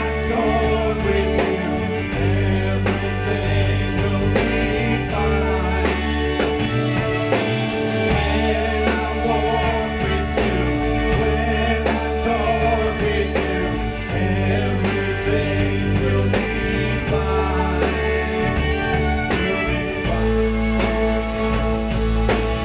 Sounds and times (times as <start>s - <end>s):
Music: 0.0s - 22.6s.